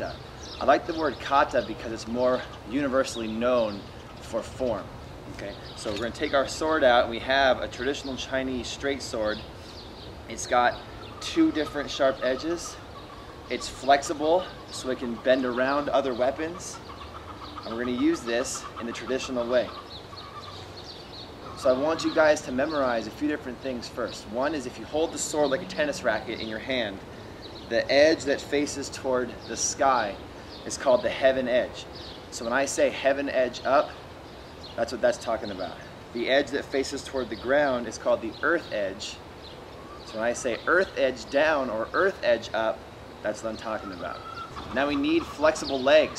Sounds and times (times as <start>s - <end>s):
Speech: 0.0s - 9.4s, 10.3s - 12.8s, 13.5s - 16.8s, 17.7s - 19.8s, 21.6s - 27.0s, 27.7s - 31.8s, 32.4s - 34.0s, 34.8s - 39.2s, 40.1s - 46.1s
Outside, rural or natural: 0.0s - 46.1s.